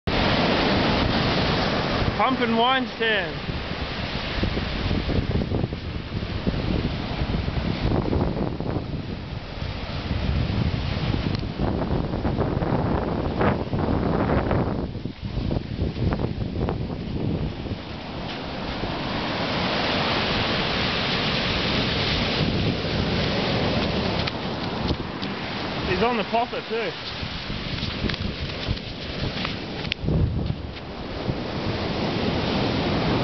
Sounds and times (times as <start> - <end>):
Wind noise (microphone): 0.0 - 2.4, 3.3 - 26.2, 26.9 - 33.2
Waves, surf: 0.0 - 33.2.